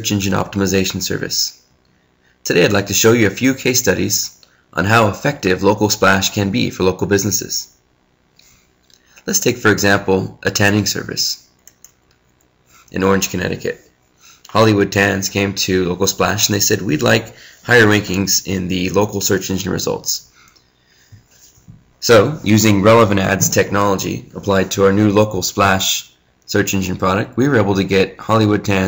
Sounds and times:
Speech: 0.0 - 1.6, 2.4 - 7.8, 9.2 - 11.5, 12.9 - 13.9, 14.5 - 20.3, 22.0 - 28.8.

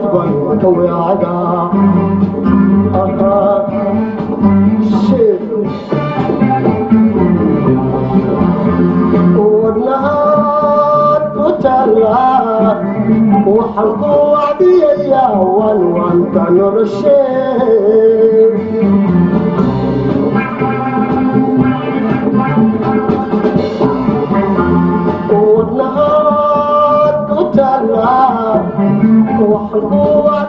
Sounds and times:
Singing: 0.0 - 5.9, 7.6 - 19.2, 20.3 - 30.4
Hammond organ: 0.0 - 30.4.

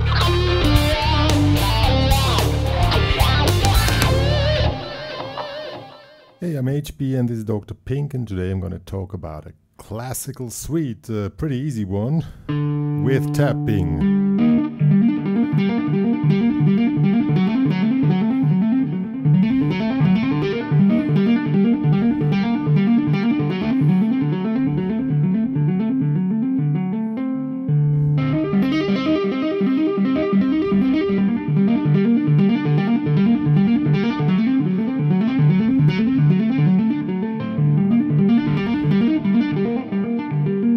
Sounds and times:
Tapping (guitar technique): 0.0 - 6.3, 12.5 - 40.7.

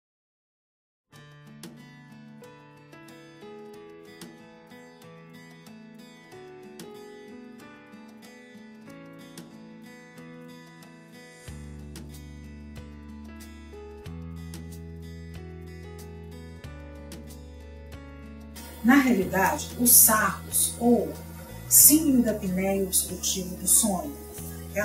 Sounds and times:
Music: 1.1 - 24.8
Speech: 18.8 - 24.2.

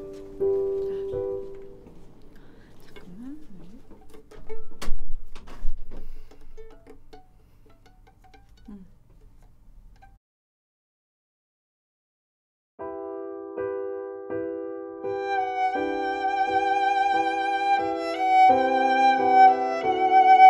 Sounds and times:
Violin, fiddle: 15.1 - 20.5.

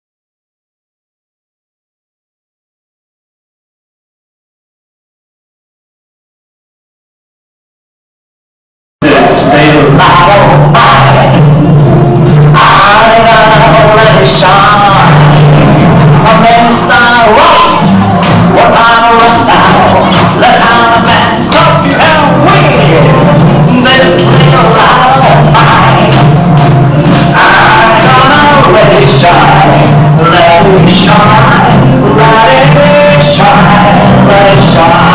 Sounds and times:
Male singing: 9.0 - 11.4, 12.5 - 26.4, 27.0 - 35.1
Music: 9.0 - 35.1.

